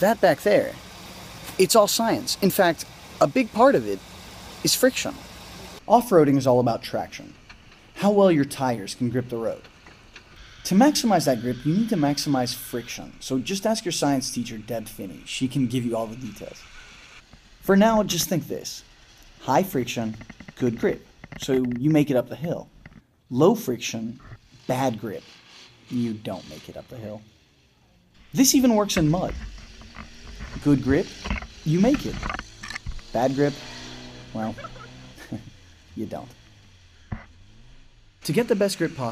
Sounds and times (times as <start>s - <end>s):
Speech: 0.0s - 0.8s, 1.5s - 4.0s, 4.6s - 5.2s, 5.9s - 7.4s, 8.0s - 9.6s, 10.7s - 16.6s, 17.6s - 18.8s, 19.4s - 22.7s, 23.3s - 25.2s, 25.9s - 27.3s, 28.4s - 29.4s, 30.6s - 32.2s, 33.2s - 33.6s, 34.4s - 36.4s, 38.2s - 39.1s.